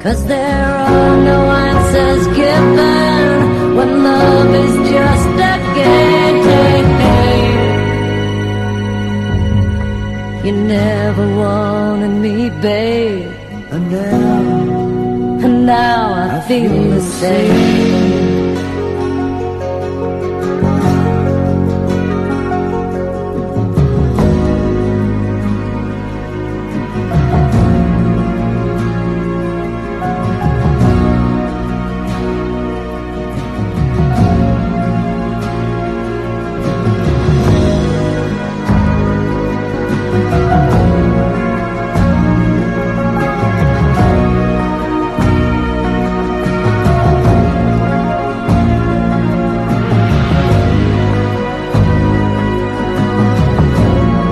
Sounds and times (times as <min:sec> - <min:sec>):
Music: 0:00.0 - 0:54.3.